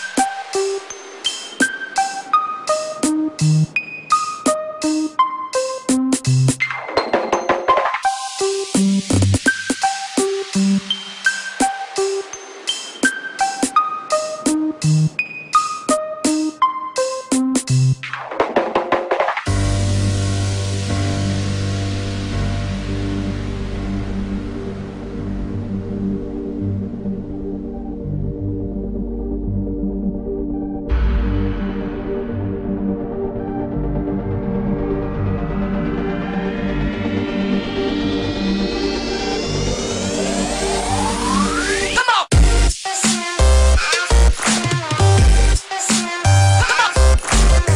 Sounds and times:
Electronic dance music: 0.0 - 15.2, 35.8 - 47.7.

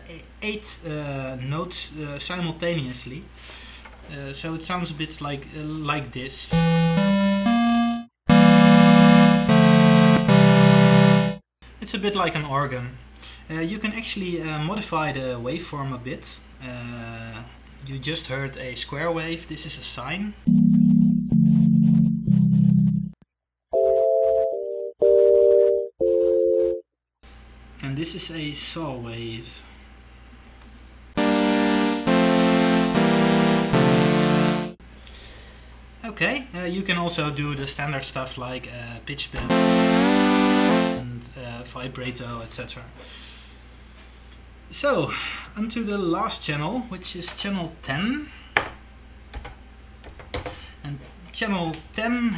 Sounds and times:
Speech: 0.0 - 3.3, 4.0 - 6.5, 11.8 - 20.4, 27.8 - 29.7, 36.0 - 39.5, 41.0 - 43.0, 44.7 - 48.4, 50.8 - 52.3.

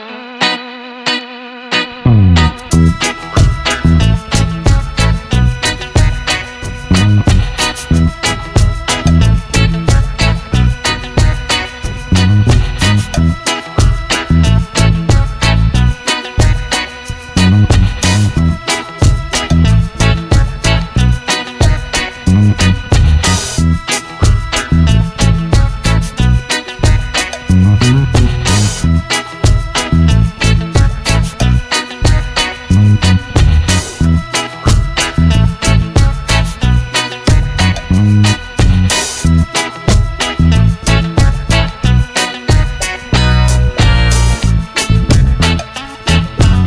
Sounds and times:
Music: 0.0 - 46.6.

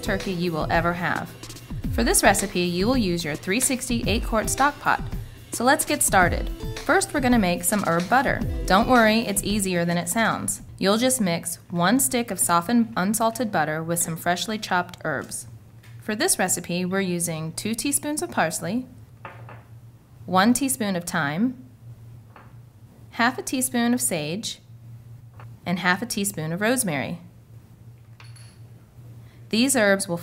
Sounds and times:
Speech: 0.0 - 1.3, 2.0 - 19.0, 20.3 - 21.6, 23.2 - 24.6, 25.7 - 27.3, 29.5 - 30.2.

